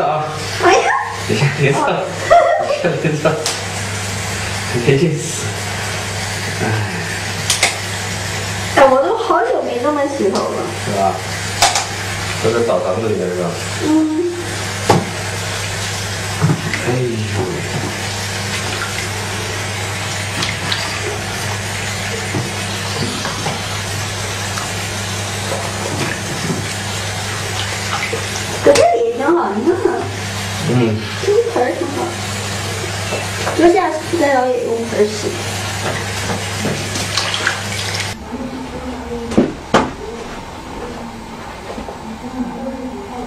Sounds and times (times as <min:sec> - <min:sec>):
Water: 0:00.0 - 0:43.2.